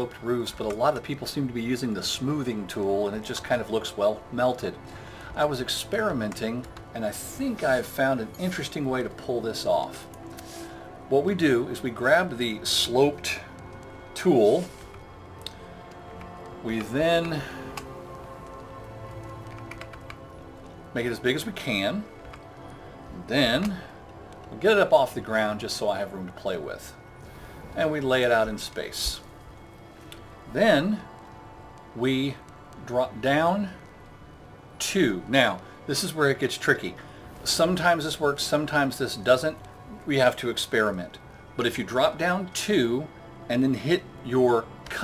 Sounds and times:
Speech: 0.0s - 4.8s, 5.4s - 10.0s, 11.1s - 13.5s, 14.2s - 14.7s, 16.6s - 17.5s, 21.0s - 22.1s, 23.2s - 23.9s, 24.5s - 27.0s, 27.8s - 29.2s, 30.5s - 31.1s, 32.0s - 33.8s, 34.8s - 45.0s
Music: 0.0s - 45.0s.

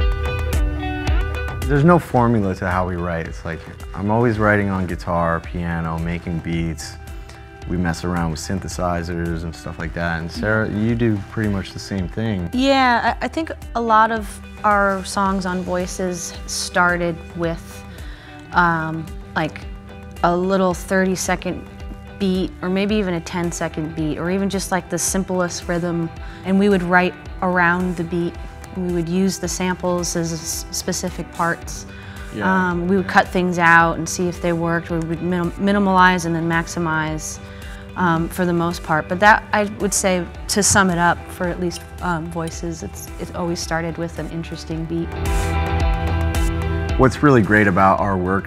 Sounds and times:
Speech: 1.7s - 7.0s, 7.7s - 16.7s, 32.4s - 36.0s, 38.0s - 45.1s, 47.0s - 48.4s.

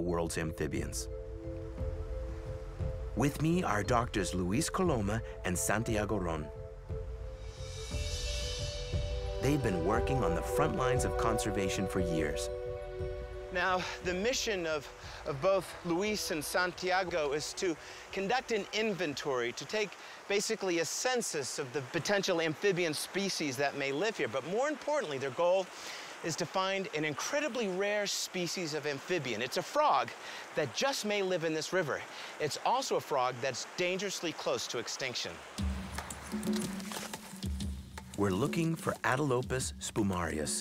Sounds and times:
Speech: 0.0s - 1.1s, 3.2s - 6.5s, 9.4s - 12.5s, 13.6s - 35.4s, 38.2s - 40.6s
Music: 0.0s - 18.2s, 35.6s - 40.6s.

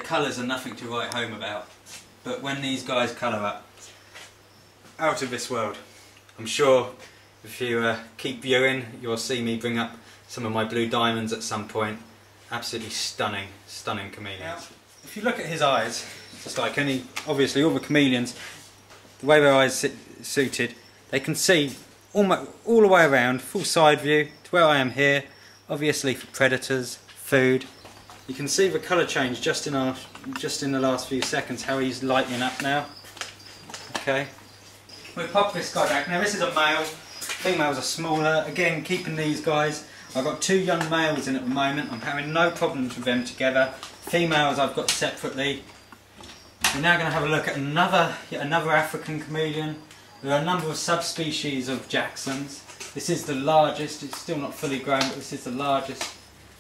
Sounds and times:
Speech: 0.0s - 3.7s, 5.0s - 18.4s, 19.2s - 27.7s, 28.3s - 32.9s, 34.0s - 34.4s, 35.2s - 45.7s, 46.7s - 56.1s.

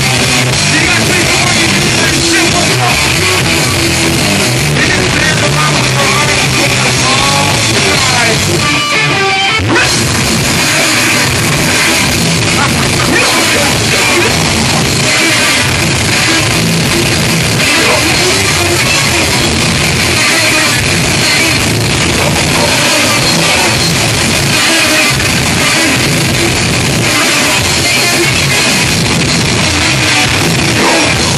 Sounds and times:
Music: 0.0s - 31.3s
Speech: 0.6s - 3.4s, 4.8s - 8.5s, 12.5s - 14.9s, 17.6s - 19.4s.

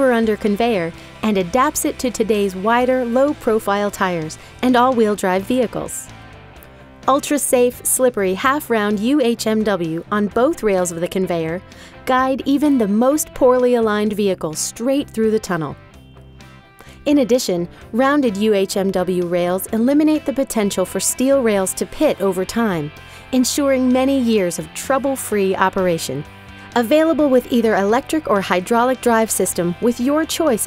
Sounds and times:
Speech: 0.0s - 6.1s, 7.1s - 15.8s, 17.1s - 26.2s, 26.8s - 30.6s
Music: 0.0s - 30.6s.

